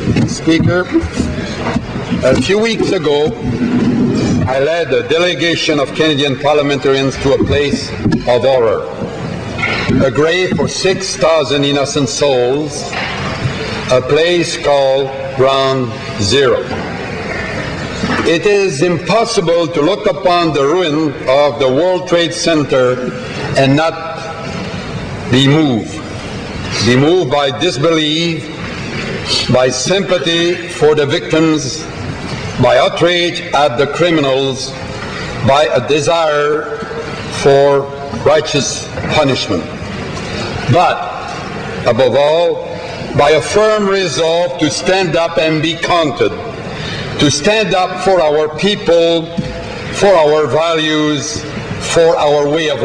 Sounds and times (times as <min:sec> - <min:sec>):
Narration, monologue: 0:00.0 - 0:17.0, 0:17.7 - 0:52.8
Male speech, man speaking: 0:00.2 - 0:01.0, 0:02.2 - 0:03.4, 0:04.5 - 0:09.0, 0:10.0 - 0:12.9, 0:13.9 - 0:16.7, 0:18.2 - 0:24.3, 0:25.3 - 0:26.0, 0:26.7 - 0:28.5, 0:29.3 - 0:31.9, 0:32.6 - 0:34.8, 0:35.4 - 0:39.7, 0:40.7 - 0:41.2, 0:41.8 - 0:46.4, 0:47.2 - 0:49.4, 0:50.0 - 0:52.8.